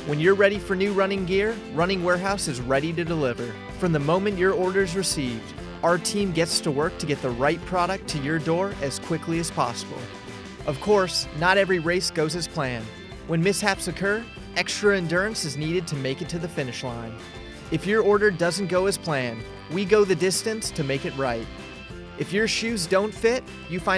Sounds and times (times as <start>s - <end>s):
Speech: 0.0s - 10.1s, 10.7s - 21.5s, 22.2s - 23.9s
Music: 0.0s - 23.9s.